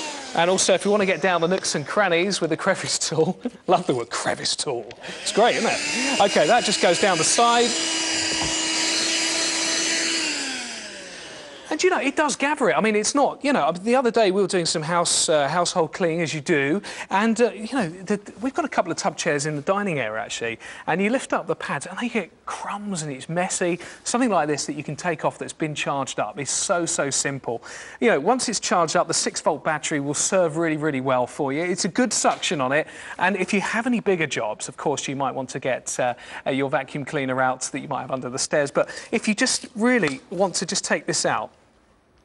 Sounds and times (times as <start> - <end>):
Vacuum cleaner: 0.0 - 1.8, 5.0 - 11.7
Speech: 0.4 - 7.8, 11.7 - 41.6.